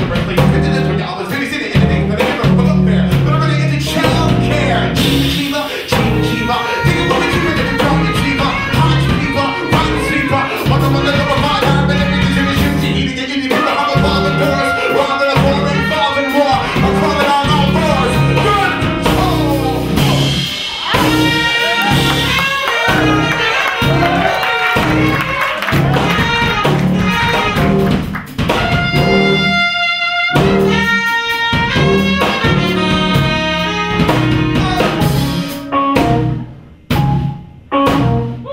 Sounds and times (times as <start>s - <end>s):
Jazz: 0.0s - 38.5s.